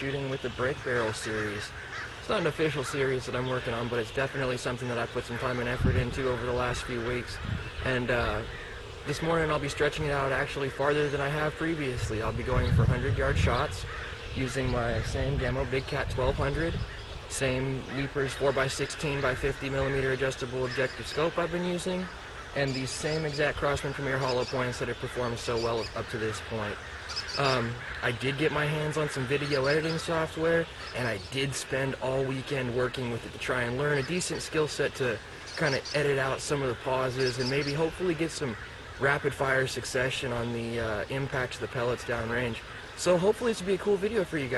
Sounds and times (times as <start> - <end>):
Speech: 0.0 - 8.5, 9.1 - 26.8, 27.4 - 44.5
Bird: 0.0 - 44.5.